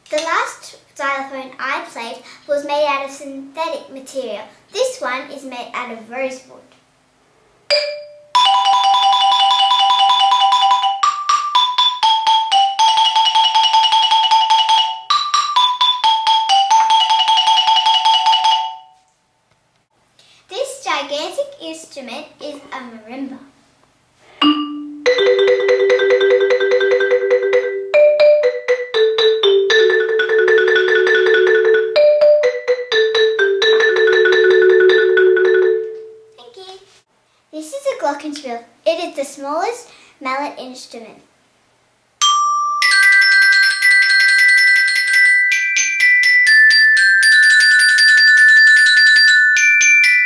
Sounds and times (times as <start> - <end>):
Marimba, xylophone: 7.7 - 19.0, 24.4 - 36.4, 42.2 - 50.2
Glockenspiel: 7.7 - 19.1, 24.4 - 36.4, 42.2 - 50.2.